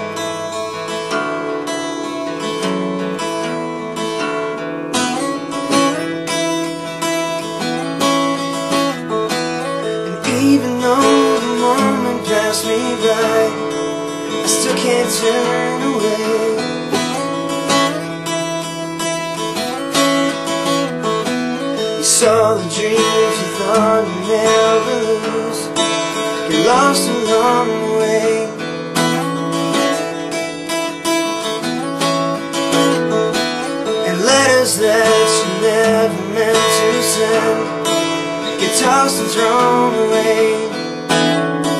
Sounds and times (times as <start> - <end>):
Music: 0.0 - 41.7
Male singing: 10.2 - 17.2, 22.0 - 28.7, 34.0 - 41.0.